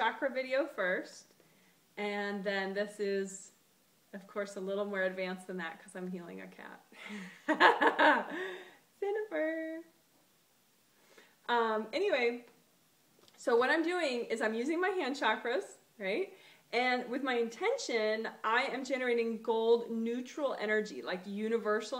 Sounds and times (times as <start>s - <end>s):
Speech: 0.0s - 1.3s, 2.0s - 3.6s, 4.2s - 6.9s, 9.0s - 9.9s, 11.5s - 12.5s, 13.4s - 21.9s.